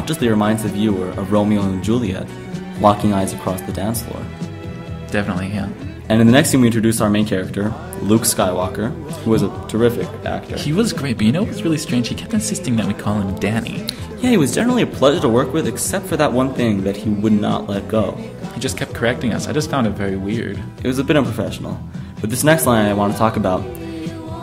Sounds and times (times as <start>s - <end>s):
Speech: 0.0s - 4.3s, 5.1s - 24.1s
Music: 0.0s - 24.4s.